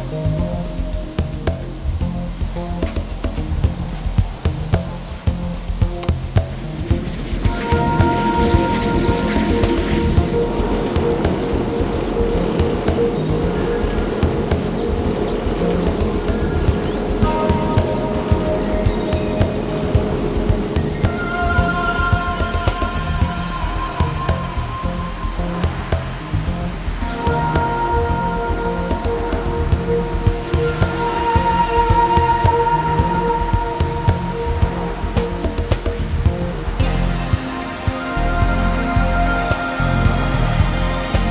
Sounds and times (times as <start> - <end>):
Music: 0.0 - 41.3.